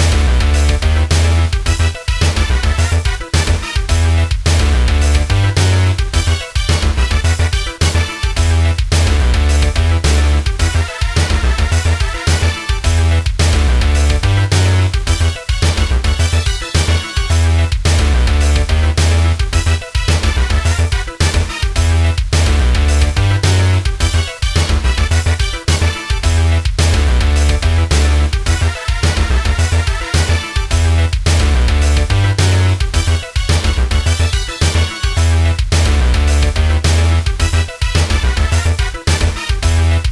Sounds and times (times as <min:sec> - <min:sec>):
Video game music: 0:00.0 - 0:40.1.